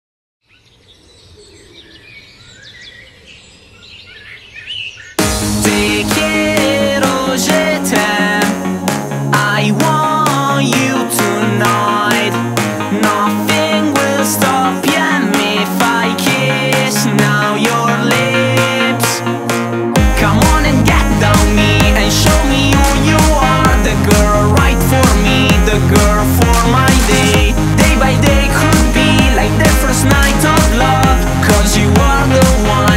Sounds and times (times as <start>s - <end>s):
Chirp, tweet: 0.4s - 5.2s.